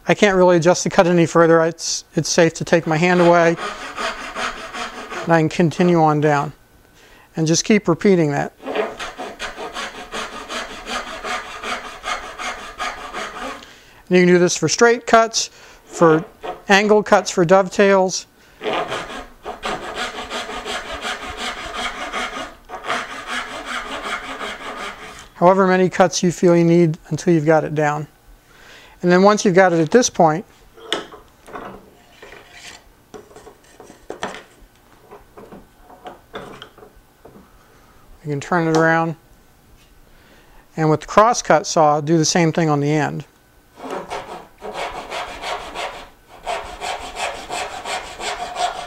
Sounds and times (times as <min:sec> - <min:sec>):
Sawing: 0:02.7 - 0:05.5, 0:08.6 - 0:13.7, 0:18.6 - 0:25.4, 0:43.8 - 0:48.8.